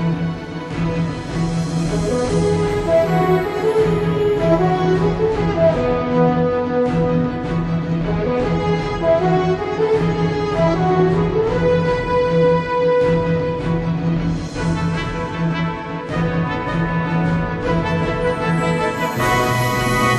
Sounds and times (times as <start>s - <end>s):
Music: 0.0s - 20.1s.